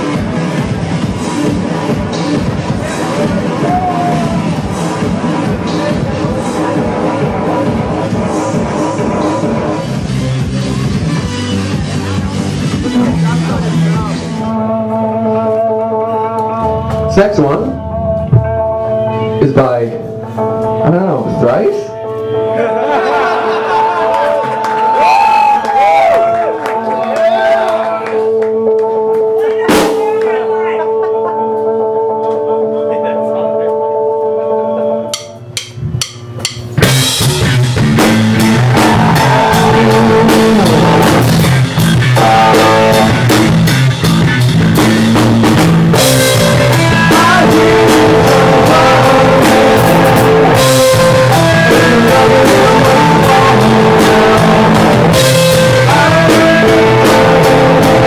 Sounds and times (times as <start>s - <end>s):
Music: 0.0s - 58.0s.